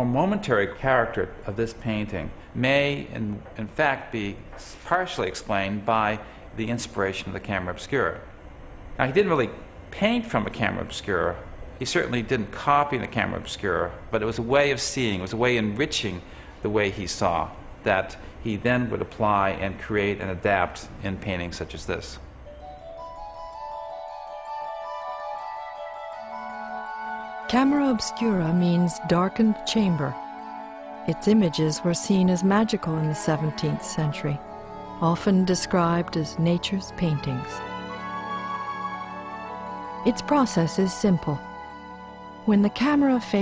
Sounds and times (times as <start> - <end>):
Speech: 0.0 - 8.3, 9.0 - 22.2, 27.5 - 30.2, 31.1 - 34.4, 35.0 - 37.6, 40.1 - 41.4, 42.5 - 43.4.